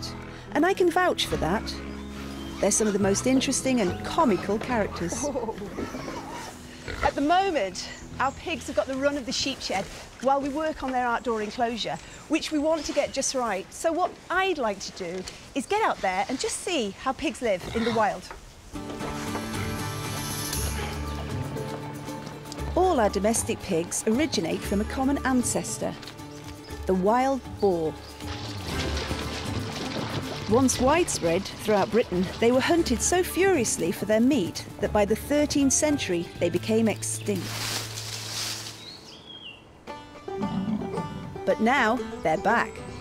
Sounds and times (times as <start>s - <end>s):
Speech: 0.0s - 1.8s, 2.6s - 5.6s, 7.0s - 18.3s, 22.8s - 26.0s, 26.9s - 28.0s, 30.5s - 37.5s, 41.5s - 42.8s
Oink: 4.2s - 7.3s, 17.6s - 18.2s.